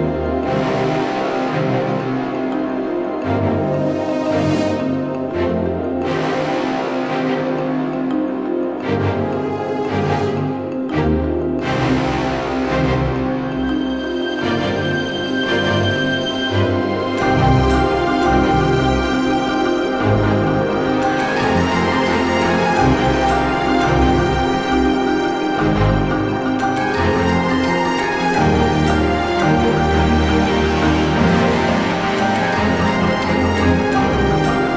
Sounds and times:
Music: 0.0s - 34.7s.

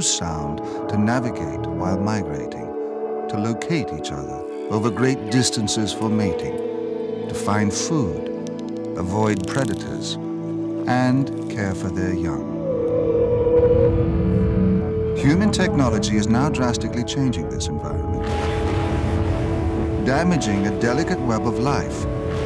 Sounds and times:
Speech: 0.0s - 2.7s, 3.3s - 6.6s, 7.3s - 8.3s, 9.0s - 10.2s, 10.9s - 12.4s, 15.2s - 18.2s, 20.0s - 22.0s
Music: 0.0s - 22.4s.

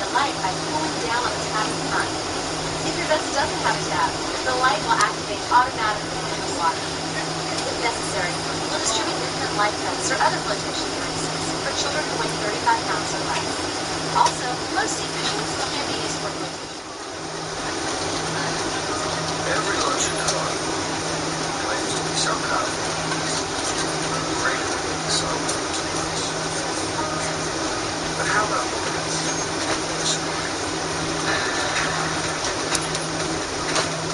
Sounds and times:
Speech: 0.0s - 2.2s, 2.8s - 16.7s, 18.3s - 20.6s, 21.5s - 30.4s.

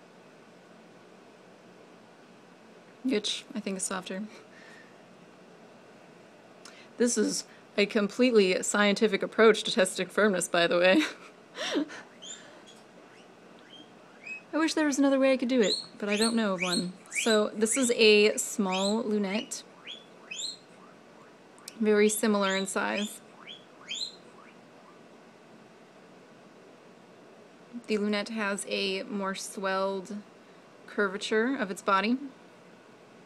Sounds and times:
Inside, small room: 0.0s - 33.2s
Speech: 3.1s - 4.4s, 7.0s - 11.0s, 14.5s - 19.6s, 21.7s - 23.2s, 27.8s - 30.3s, 30.9s - 32.3s.

